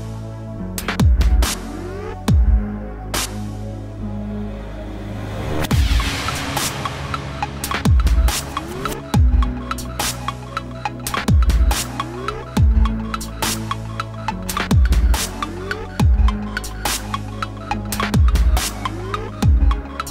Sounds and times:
Dubstep: 0.0 - 20.1.

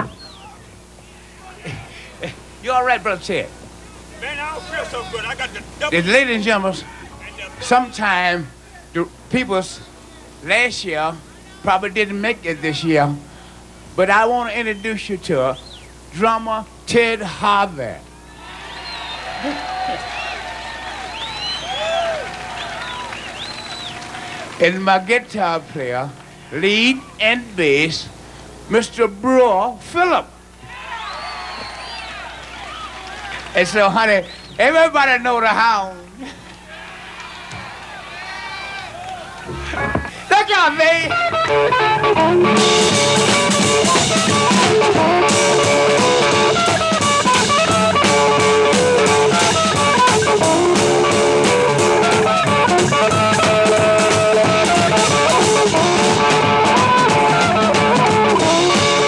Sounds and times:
Speech: 2.6 - 13.2, 14.0 - 15.6, 16.2 - 18.0, 24.6 - 28.1, 28.7 - 30.3, 33.6 - 36.2, 40.2 - 41.1.

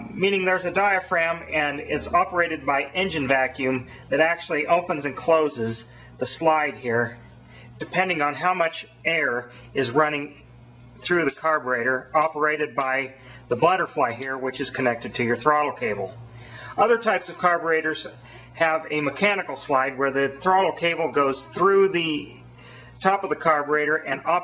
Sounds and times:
Speech: 0.0 - 7.2, 7.8 - 10.4, 11.0 - 16.2, 16.8 - 22.4, 23.0 - 24.4.

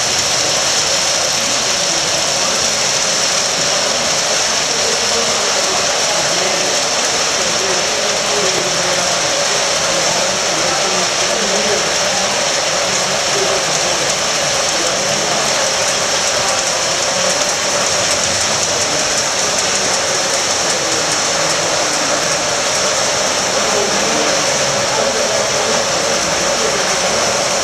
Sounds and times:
Speech: 0.0 - 27.6.

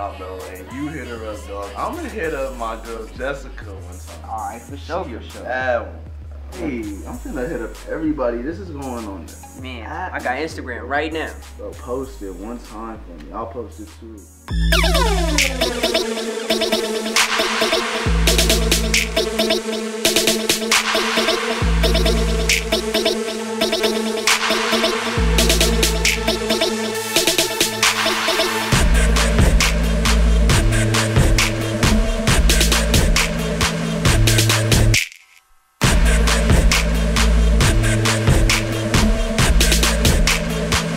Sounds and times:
Speech: 0.0 - 14.2
Music: 0.0 - 35.0, 35.8 - 40.9.

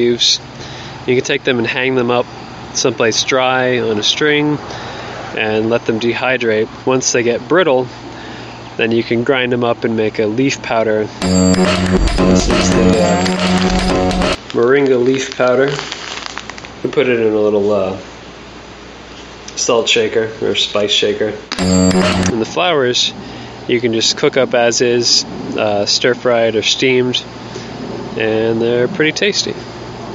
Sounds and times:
Speech: 0.0 - 0.5, 1.1 - 4.7, 5.4 - 8.0, 8.8 - 11.2, 14.5 - 15.9, 16.8 - 18.1, 19.5 - 21.5, 22.3 - 27.3, 28.2 - 29.6
Music: 11.2 - 14.4, 21.6 - 22.4.

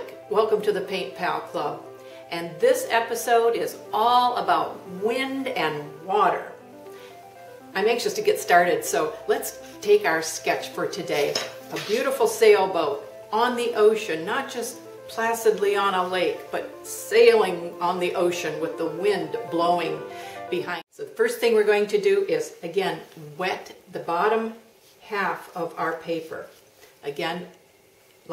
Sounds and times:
Speech: 0.0 - 6.6, 7.8 - 27.5
Music: 0.0 - 20.9.

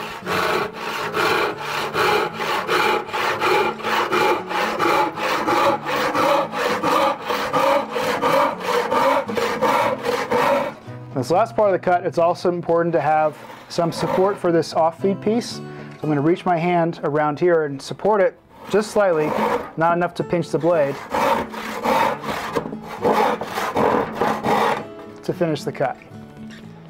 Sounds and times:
Wood: 0.0 - 10.8, 12.6 - 14.5, 18.6 - 19.8, 20.6 - 24.9
Sawing: 0.0 - 11.4, 12.7 - 15.0, 18.1 - 25.1.

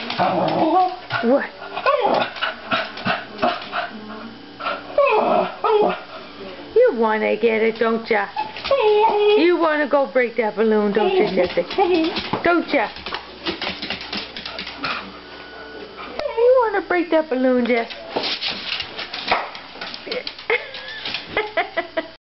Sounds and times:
Speech: 6.4 - 8.4, 9.3 - 13.0, 16.2 - 18.1.

